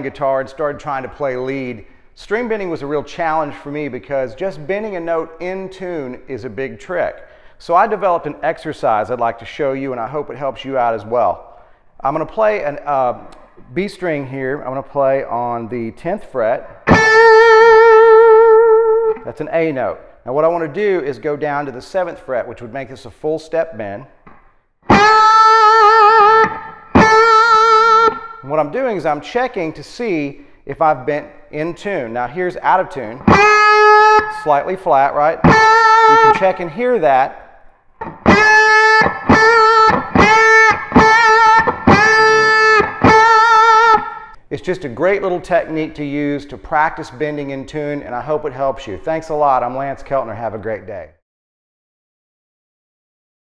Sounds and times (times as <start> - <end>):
Speech: 0.0 - 16.7, 19.3 - 24.1, 28.4 - 33.2, 34.4 - 35.5, 36.1 - 37.4, 44.5 - 51.2
Bass guitar: 16.6 - 19.5, 24.2 - 28.6, 32.6 - 37.1, 38.0 - 44.4.